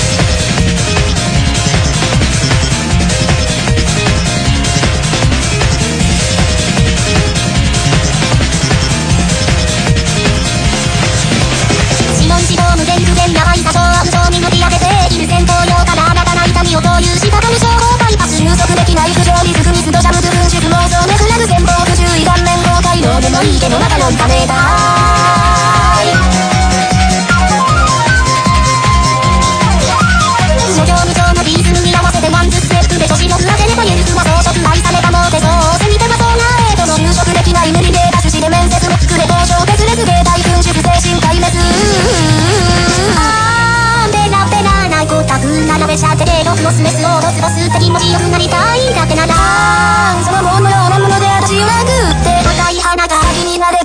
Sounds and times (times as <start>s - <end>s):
Music: 0.0s - 53.8s.